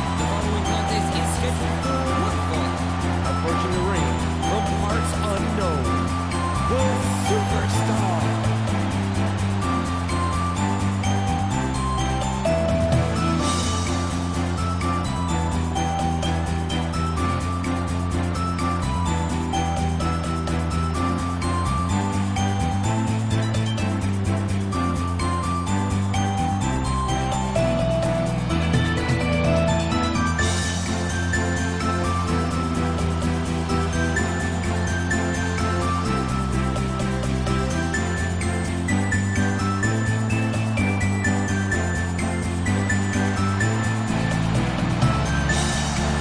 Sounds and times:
Music: 0.0s - 46.2s.

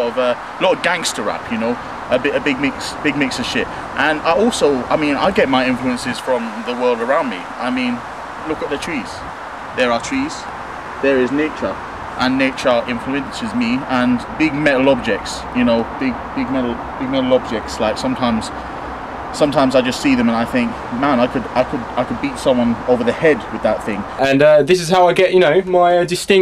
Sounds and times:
Speech: 0.0s - 18.6s, 19.4s - 26.4s.

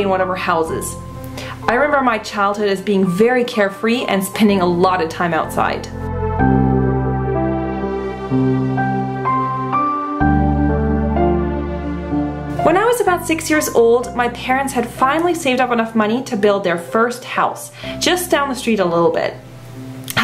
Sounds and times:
New-age music: 0.0s - 20.2s.

